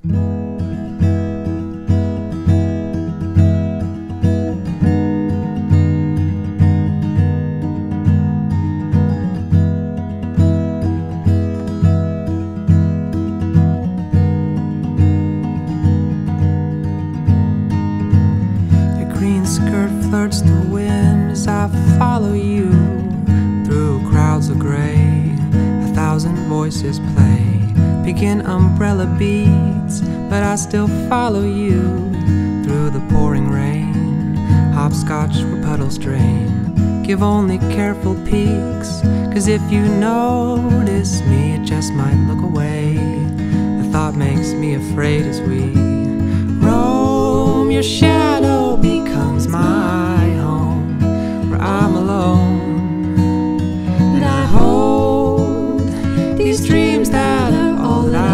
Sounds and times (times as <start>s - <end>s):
Music: 0.0s - 58.3s.